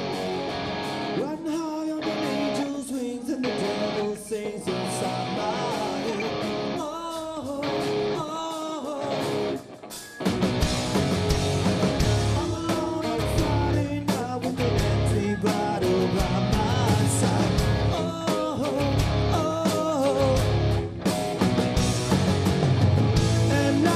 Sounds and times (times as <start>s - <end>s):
Music: 0.0s - 23.9s.